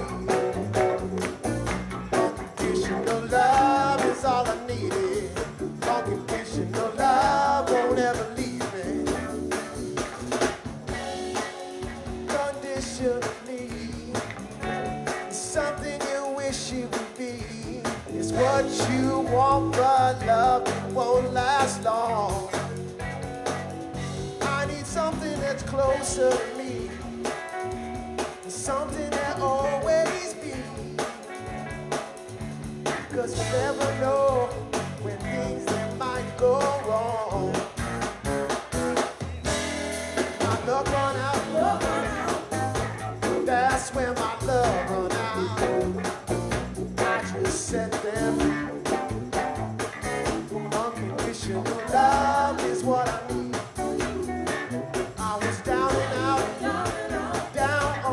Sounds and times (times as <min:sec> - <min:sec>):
Happy music: 0:00.0 - 0:58.1.